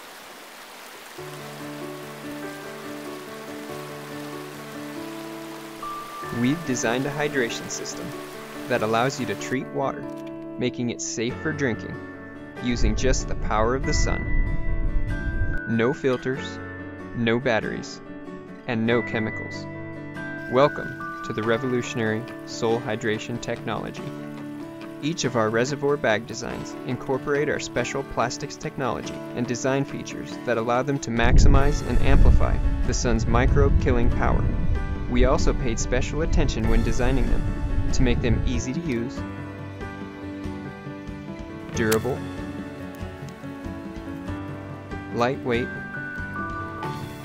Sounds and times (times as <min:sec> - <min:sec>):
Music: 0:01.0 - 0:47.2
Speech: 0:06.3 - 0:08.1, 0:08.7 - 0:12.0, 0:12.6 - 0:14.2, 0:15.7 - 0:16.6, 0:17.2 - 0:18.0, 0:18.7 - 0:19.6, 0:20.5 - 0:24.1, 0:25.0 - 0:34.5, 0:35.1 - 0:39.2, 0:41.8 - 0:42.2, 0:45.1 - 0:45.8.